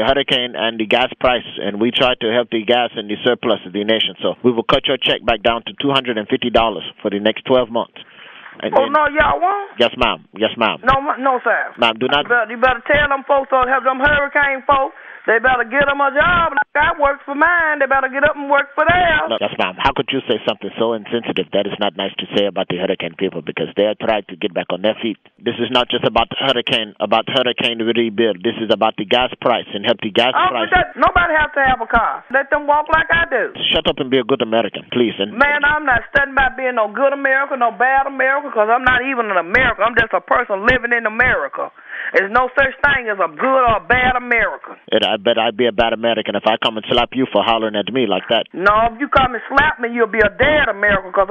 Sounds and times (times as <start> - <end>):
Speech: 8.6 - 51.3.